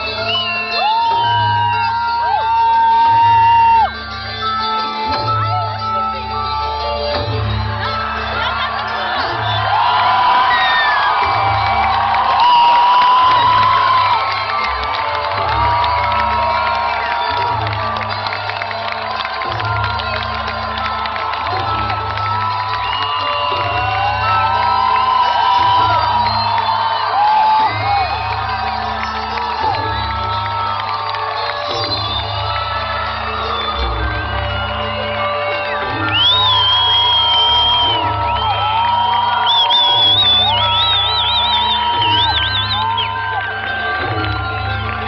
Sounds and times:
Cheering: 0.0s - 45.0s.

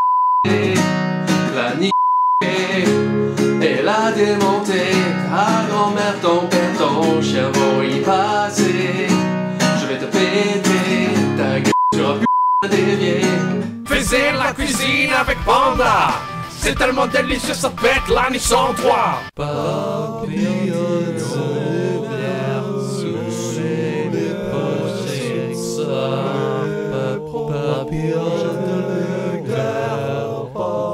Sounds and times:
Music: 0.5s - 30.9s.

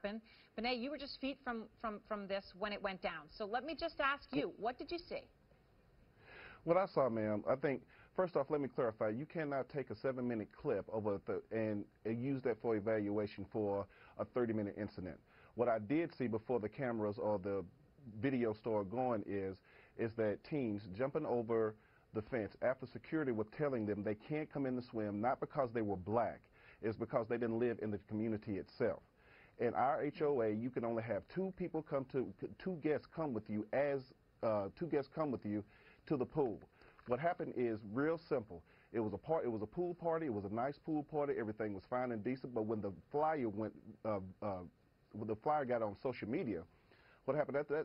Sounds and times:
Speech: 0.0s - 5.3s, 6.6s - 29.0s, 29.6s - 46.7s, 47.3s - 47.8s.

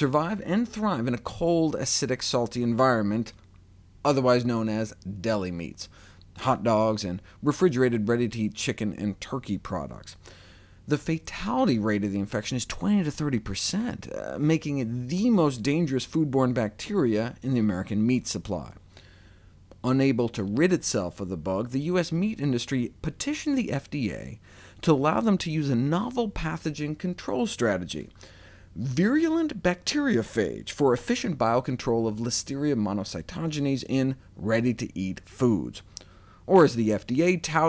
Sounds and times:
Speech: 0.0s - 3.4s, 4.1s - 10.2s, 10.9s - 18.8s, 19.8s - 28.2s, 28.8s - 35.9s, 36.5s - 37.6s.

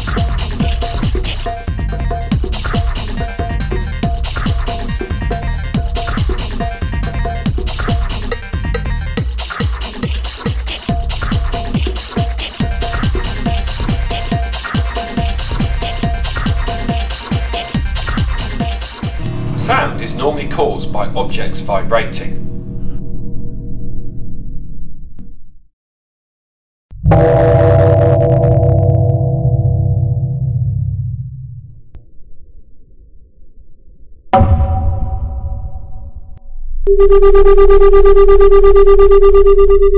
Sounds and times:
Music: 0.0s - 25.3s
Speech: 19.6s - 22.4s.

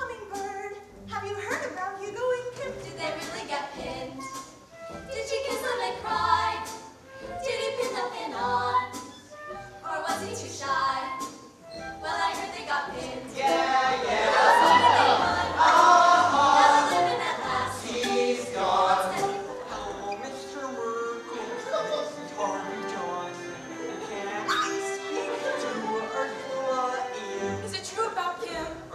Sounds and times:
Music: 0.0s - 28.9s.

